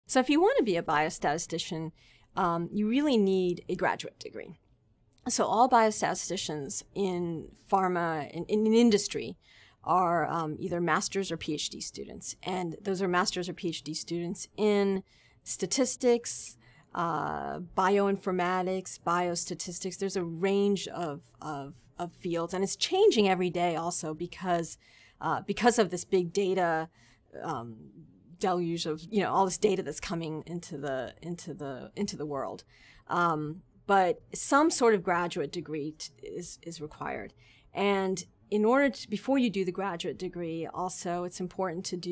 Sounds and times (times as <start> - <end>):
Inside, small room: 0.0 - 42.1
Speech: 0.1 - 4.6, 5.2 - 42.1.